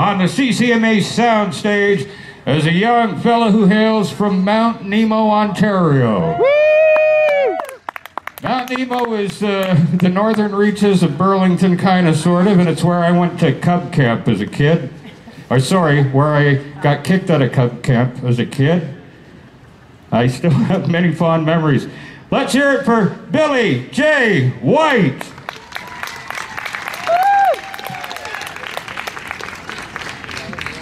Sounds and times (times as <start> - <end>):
Speech: 0.0 - 6.4, 8.4 - 19.0, 20.1 - 25.3.